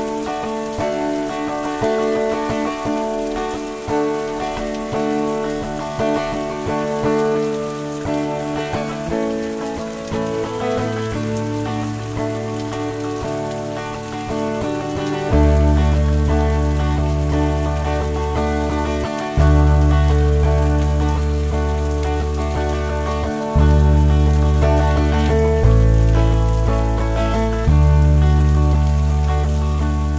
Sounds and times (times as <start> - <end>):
Music: 0.0 - 30.1
Rain on surface: 0.0 - 30.1.